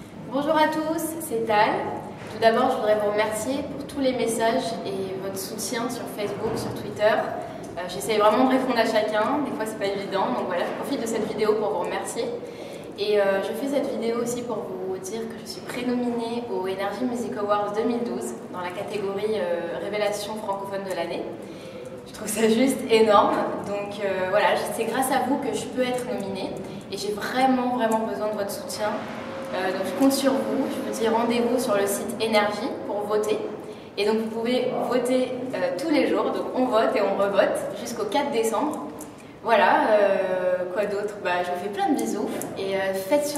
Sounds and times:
Speech: 0:00.3 - 0:12.4, 0:13.0 - 0:21.4, 0:22.0 - 0:43.3.

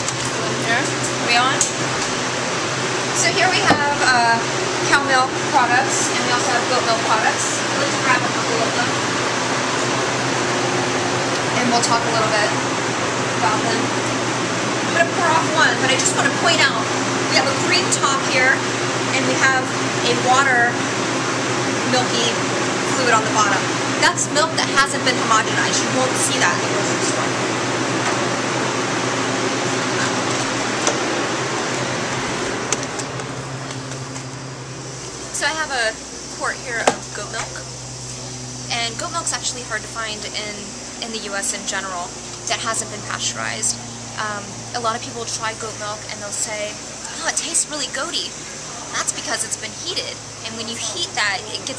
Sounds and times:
Speech: 0:00.4 - 0:01.7, 0:03.2 - 0:09.0, 0:11.6 - 0:12.6, 0:13.4 - 0:13.9, 0:14.9 - 0:18.6, 0:19.2 - 0:20.8, 0:21.8 - 0:27.4, 0:35.4 - 0:37.7, 0:38.7 - 0:51.7.

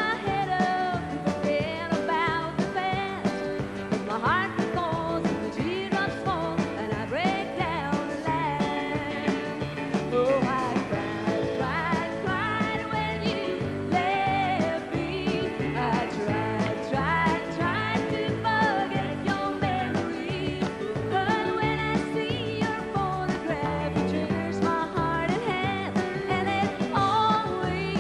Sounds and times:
Country: 0:00.0 - 0:28.0.

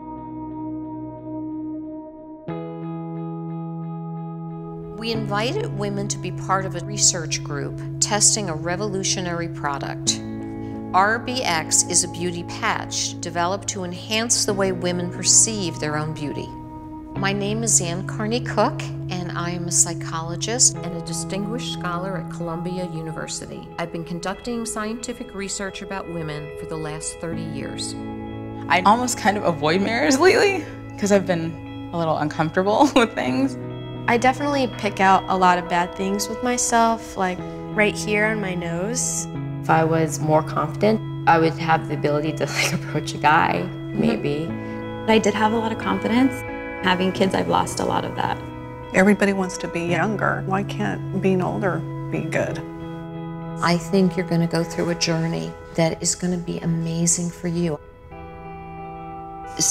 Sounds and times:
Music: 0:00.0 - 0:59.7
Speech: 0:05.0 - 0:10.2, 0:11.0 - 0:16.5, 0:17.2 - 0:28.0, 0:28.7 - 0:44.5, 0:49.0 - 0:52.6, 0:53.6 - 0:57.8.

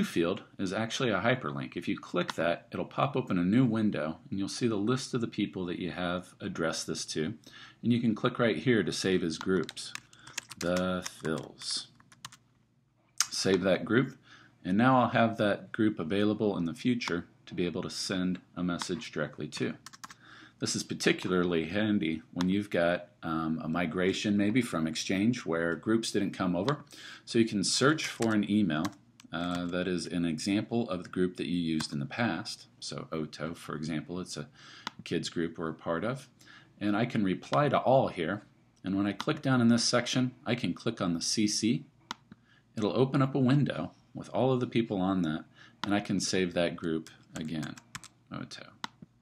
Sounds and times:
Speech: 0:00.0 - 0:12.0, 0:13.2 - 0:19.9, 0:20.6 - 0:41.9, 0:42.8 - 0:48.8.

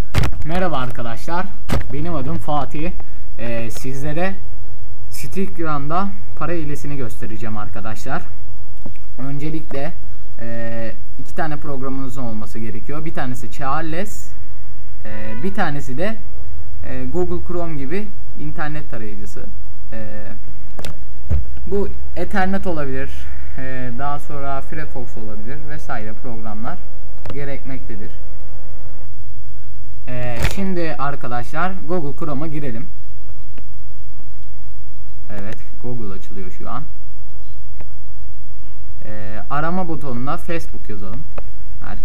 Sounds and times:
Speech: 0:00.4 - 0:04.4, 0:05.1 - 0:08.4, 0:09.2 - 0:14.4, 0:15.0 - 0:16.2, 0:16.8 - 0:20.4, 0:21.7 - 0:28.2, 0:30.1 - 0:32.9, 0:35.3 - 0:37.0, 0:39.0 - 0:42.0.

